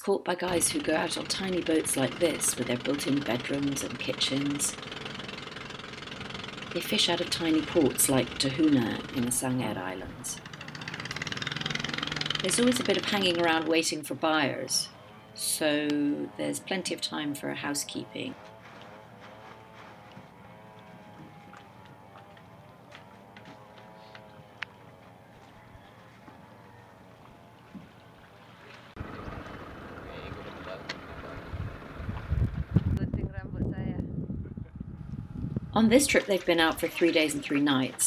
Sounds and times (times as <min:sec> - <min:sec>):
Speech: 0:00.0 - 0:04.8, 0:06.8 - 0:10.4, 0:12.4 - 0:18.4, 0:33.0 - 0:34.1, 0:35.8 - 0:38.0.